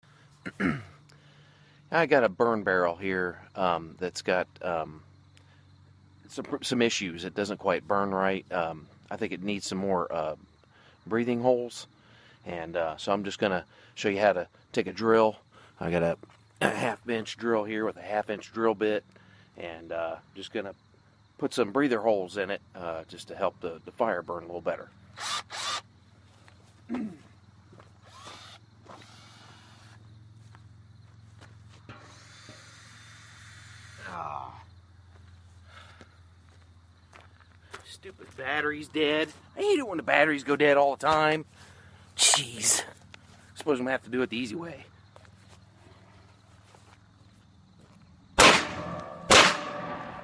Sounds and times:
Speech: 0:01.9 - 0:05.0, 0:06.3 - 0:10.4, 0:11.1 - 0:11.9, 0:12.5 - 0:19.0, 0:19.6 - 0:20.8, 0:21.4 - 0:24.9, 0:37.8 - 0:41.4, 0:42.2 - 0:43.0, 0:43.6 - 0:44.9.

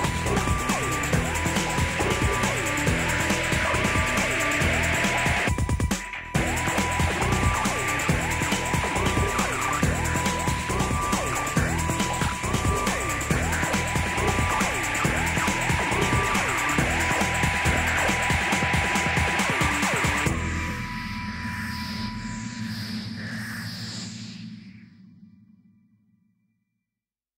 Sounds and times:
Music: 0:00.0 - 0:25.6.

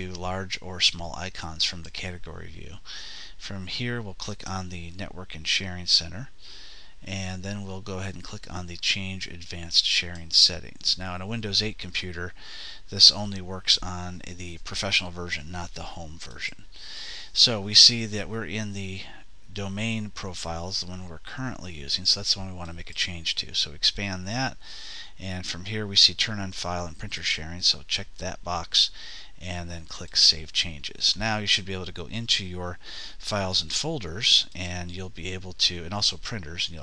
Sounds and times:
Speech: 0:00.0 - 0:06.4, 0:07.0 - 0:36.8.

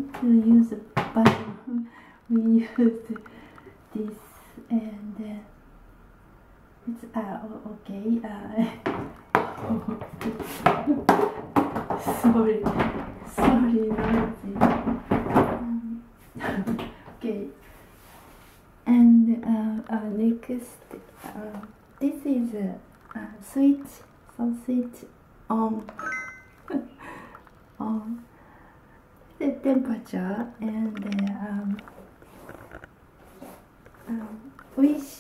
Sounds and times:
Speech: 0:00.0 - 0:03.2, 0:03.9 - 0:05.6, 0:06.8 - 0:08.9, 0:12.0 - 0:17.6, 0:18.8 - 0:26.0, 0:27.8 - 0:28.3, 0:29.4 - 0:31.8, 0:34.0 - 0:35.2.

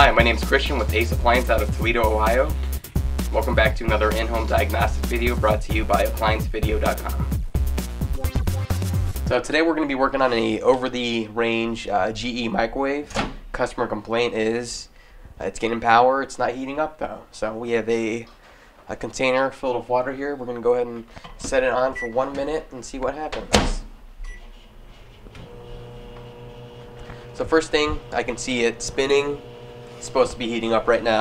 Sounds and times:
Speech: 0:00.0 - 0:02.6, 0:03.3 - 0:07.2, 0:09.3 - 0:18.3, 0:18.9 - 0:23.9, 0:27.4 - 0:29.4, 0:30.0 - 0:31.2.

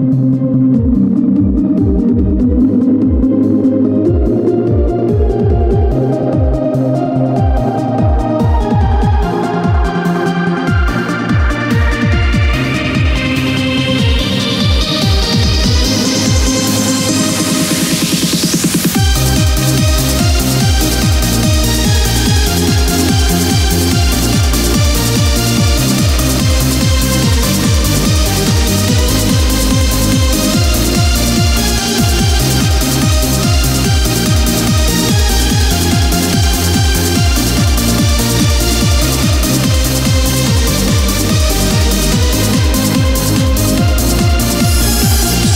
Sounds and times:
Techno: 0:00.0 - 0:45.5.

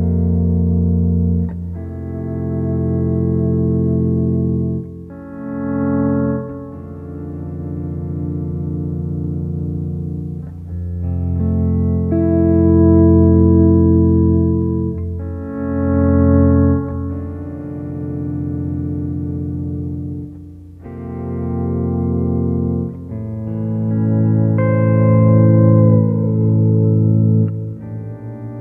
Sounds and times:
Music: 0:00.0 - 0:28.6.

